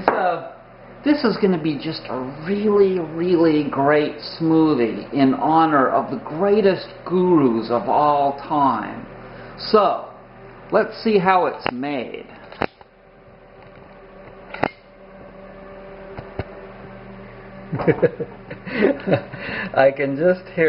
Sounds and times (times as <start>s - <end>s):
Speech: 0.0s - 12.4s, 19.7s - 20.6s.